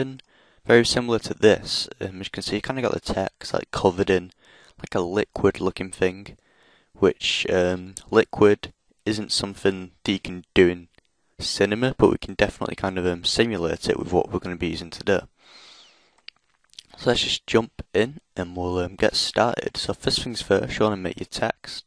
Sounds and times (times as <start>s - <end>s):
Speech: 0.0s - 6.4s, 7.0s - 15.3s, 16.8s - 21.8s.